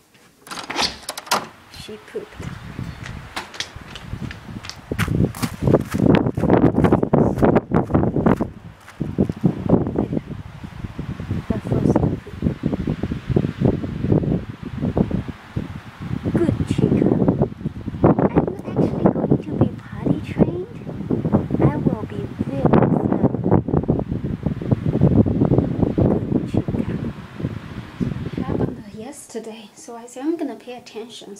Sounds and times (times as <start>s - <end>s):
Speech: 1.7s - 2.6s, 10.0s - 10.2s, 11.5s - 12.4s, 16.3s - 17.3s, 18.3s - 20.8s, 21.6s - 23.3s, 26.4s - 27.1s, 28.3s - 31.3s.